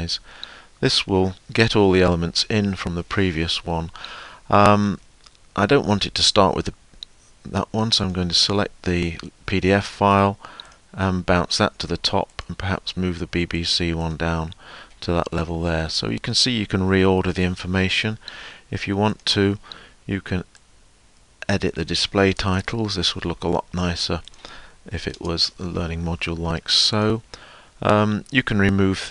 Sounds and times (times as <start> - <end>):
Speech: 0.8 - 3.9, 4.5 - 5.0, 5.6 - 6.8, 7.5 - 10.4, 11.0 - 20.5, 21.4 - 24.2, 24.9 - 27.2, 27.8 - 29.1.